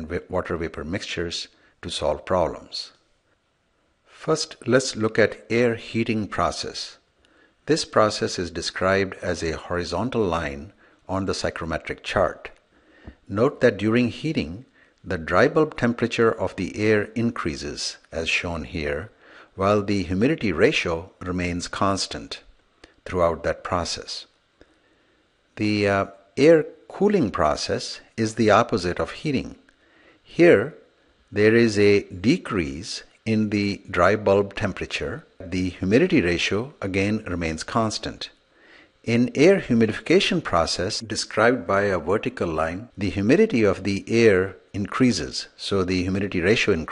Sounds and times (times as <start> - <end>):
Speech: 0.0 - 3.0, 4.1 - 7.0, 7.7 - 12.6, 13.3 - 24.4, 25.6 - 29.7, 30.3 - 38.4, 39.0 - 46.9.